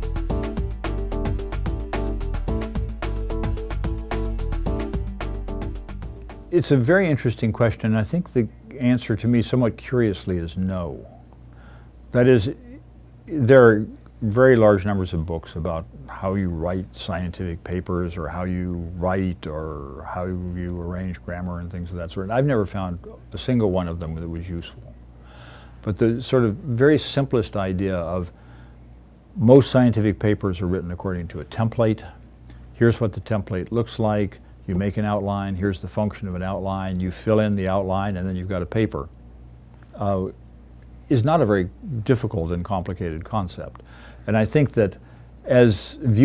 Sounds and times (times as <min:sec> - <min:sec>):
Speech: 0:06.5 - 0:11.3, 0:12.1 - 0:25.0, 0:25.8 - 0:28.4, 0:29.4 - 0:32.2, 0:32.8 - 0:39.2, 0:39.9 - 0:40.4, 0:41.1 - 0:46.2.